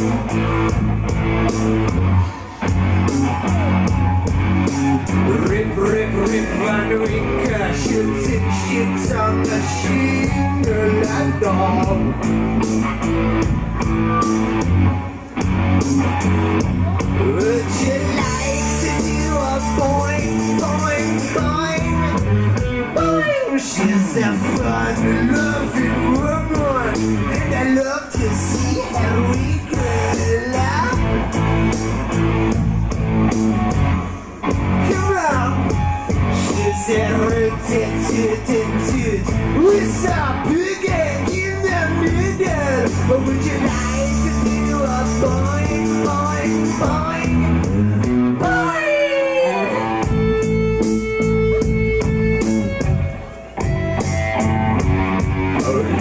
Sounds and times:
Music: 0.0 - 56.0.

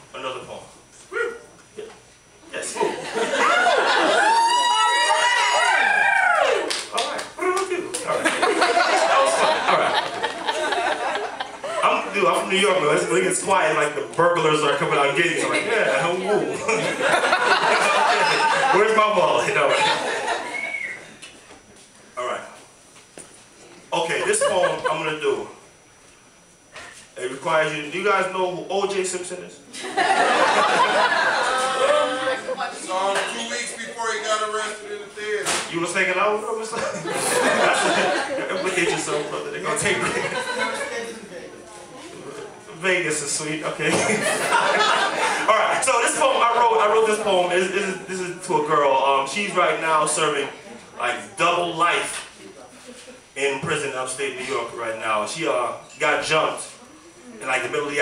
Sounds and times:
Speech: 11.8 - 16.8, 23.9 - 25.6, 27.2 - 29.6, 32.5 - 37.0, 37.6 - 44.3, 45.5 - 52.8, 53.4 - 58.0.

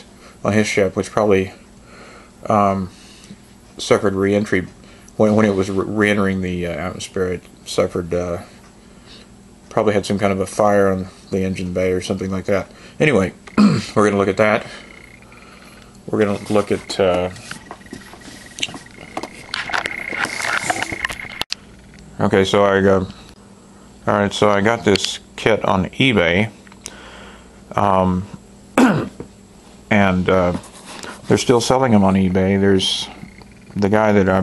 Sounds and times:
Speech: 0.0 - 1.6, 2.4 - 3.0, 3.8 - 8.6, 9.7 - 14.9, 16.1 - 17.5, 22.2 - 23.2, 24.0 - 26.6, 27.7 - 28.4, 29.9 - 34.4.

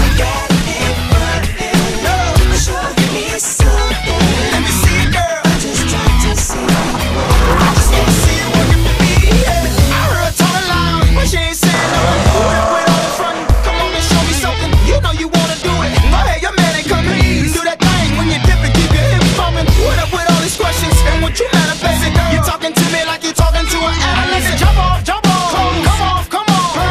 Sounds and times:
Music: 0.0 - 26.9.

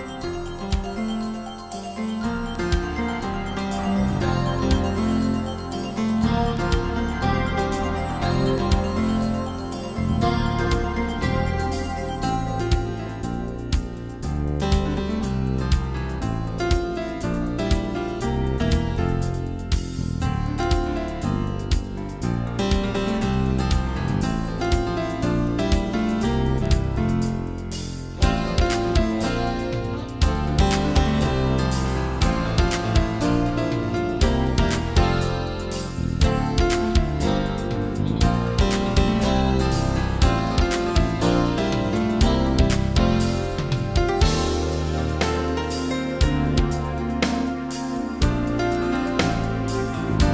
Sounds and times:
Music: 0.0 - 50.3.

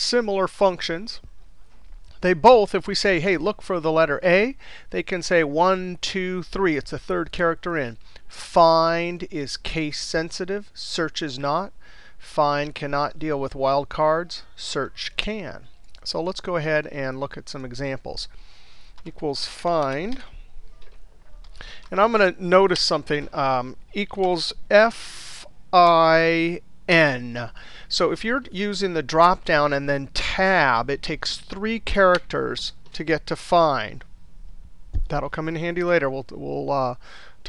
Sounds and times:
Speech: 0.0 - 1.3, 2.2 - 18.3, 19.1 - 20.4, 21.2 - 34.1, 35.1 - 37.4.

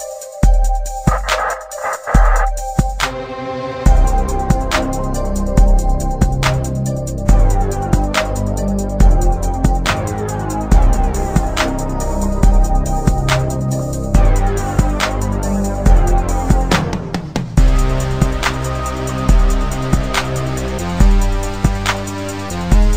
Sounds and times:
Music: 0.0 - 22.9.

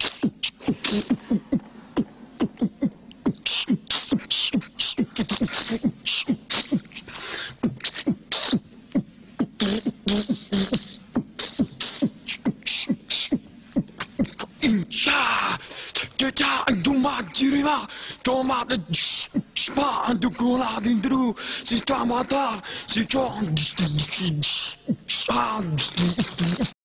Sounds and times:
Speech: 14.6 - 26.8.

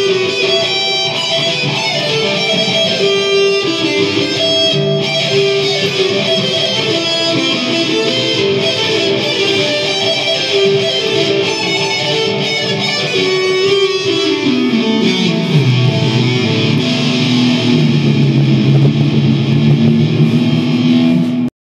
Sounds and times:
Electric guitar: 0.0 - 21.5
Strum: 0.1 - 21.5.

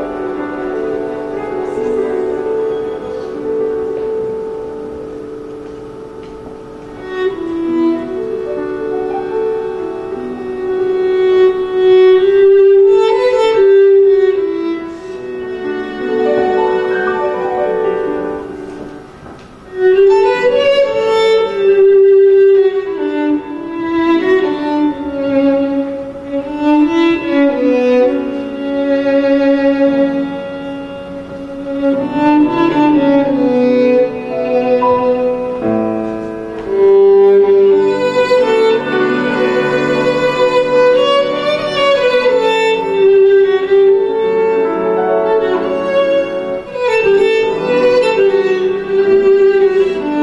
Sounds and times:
Violin, fiddle: 0.0 - 50.2.

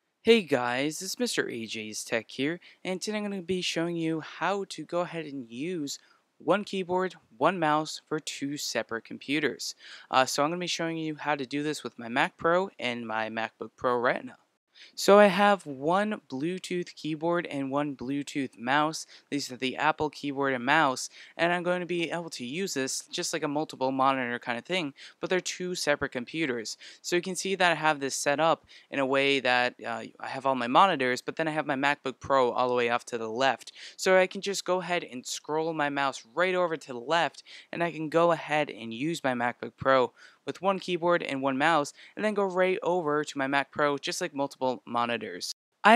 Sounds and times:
Speech: 0.3 - 14.4, 15.0 - 45.9.

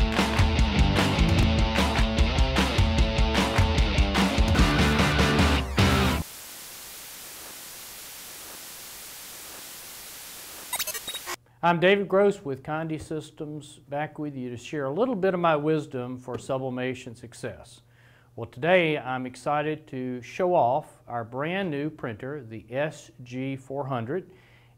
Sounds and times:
Speech: 11.6 - 17.8, 18.4 - 24.3.

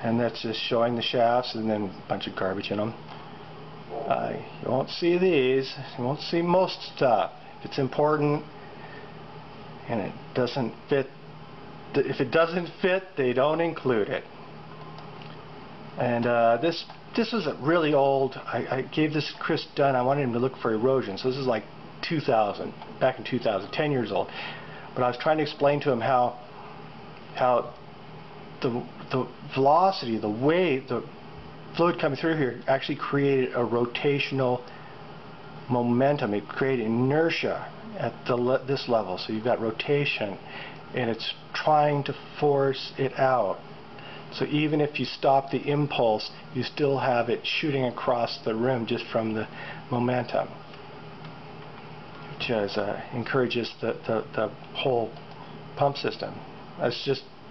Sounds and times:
Speech: 0.0 - 3.0, 3.9 - 8.5, 9.8 - 11.2, 11.9 - 14.4, 16.0 - 24.3, 25.0 - 26.5, 27.3 - 27.8, 28.6 - 34.8, 35.7 - 43.6, 44.3 - 50.6, 52.4 - 55.2, 55.8 - 57.4.

